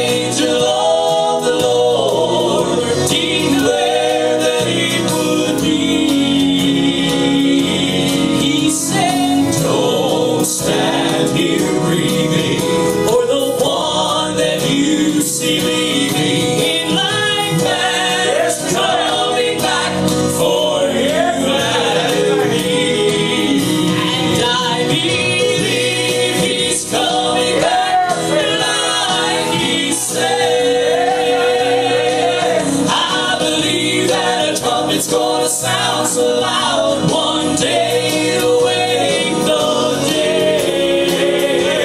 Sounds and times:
Male singing: 0.0 - 17.8, 20.4 - 28.7
Music: 0.0 - 41.8.

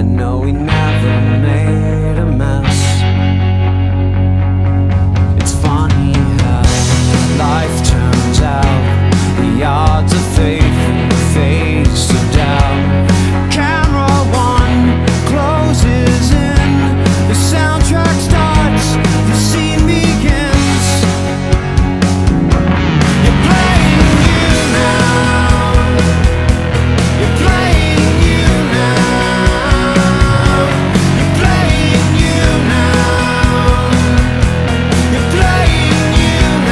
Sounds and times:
Music: 0.0 - 36.7.

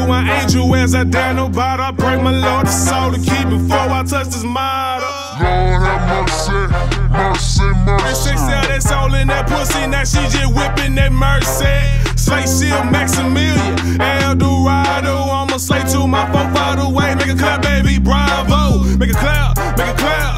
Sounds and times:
Rhythm and blues: 0.0 - 20.3
Middle Eastern music: 2.0 - 20.3.

